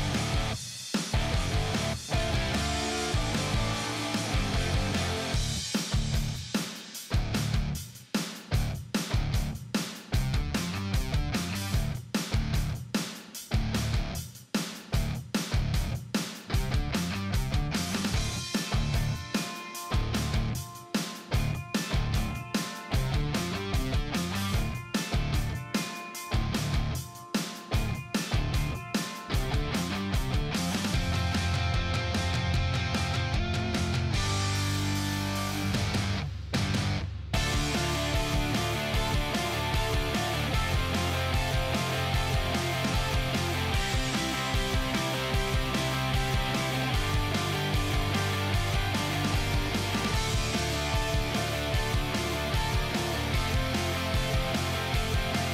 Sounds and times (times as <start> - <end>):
Music: 0.0 - 55.5.